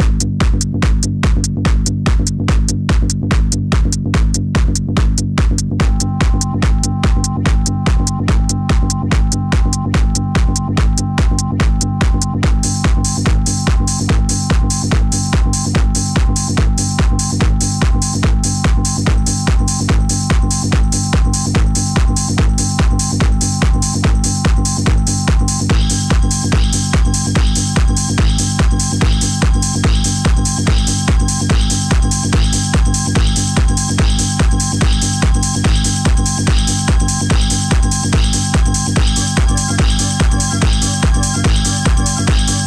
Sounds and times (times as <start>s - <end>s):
Funk: 0.0s - 42.6s.